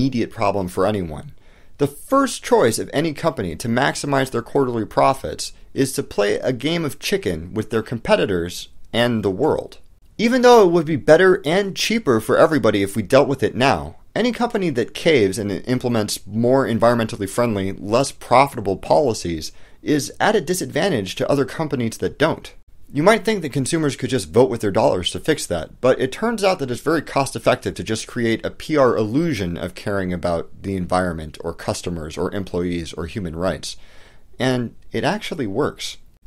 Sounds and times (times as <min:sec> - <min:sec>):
Speech: 0:00.0 - 0:33.8, 0:34.4 - 0:36.1.